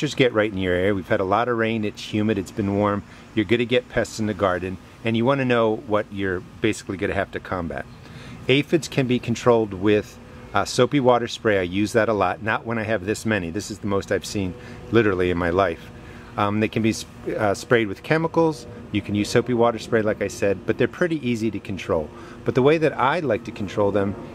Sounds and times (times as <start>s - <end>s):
Speech: 0.0s - 24.2s.